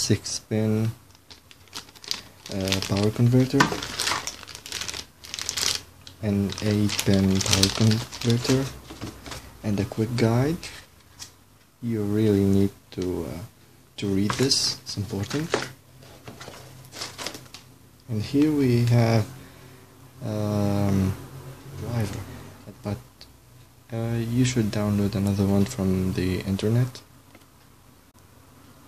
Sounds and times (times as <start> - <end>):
Speech: 0.0 - 1.0, 2.5 - 3.8, 6.2 - 8.8, 9.6 - 10.8, 11.8 - 15.7, 18.1 - 19.3, 20.2 - 21.2, 21.8 - 23.1, 23.9 - 27.1
Crumpling, crinkling: 1.1 - 9.5, 15.2 - 17.6.